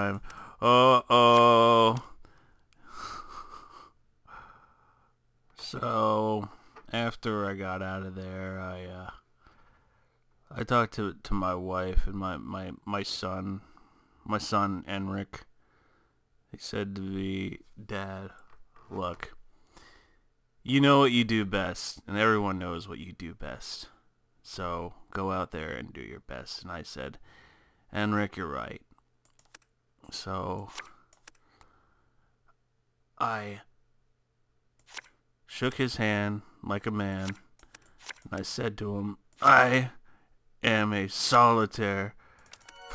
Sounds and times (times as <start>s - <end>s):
Speech: 0.0s - 2.1s, 5.6s - 9.2s, 10.5s - 13.7s, 14.3s - 15.5s, 16.5s - 19.4s, 20.7s - 27.2s, 27.9s - 28.9s, 30.0s - 30.8s, 33.2s - 33.7s, 35.5s - 37.4s, 38.3s - 40.0s, 40.6s - 42.2s
Inside, small room: 0.0s - 42.9s.